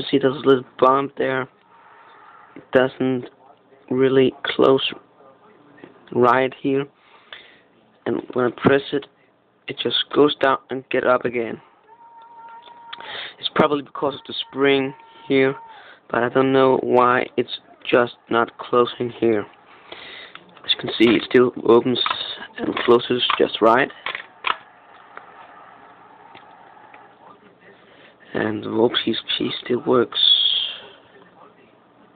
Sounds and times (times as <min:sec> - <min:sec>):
Speech: 0:00.0 - 0:01.6, 0:02.6 - 0:07.0, 0:07.8 - 0:19.6, 0:20.4 - 0:24.0, 0:27.1 - 0:32.1.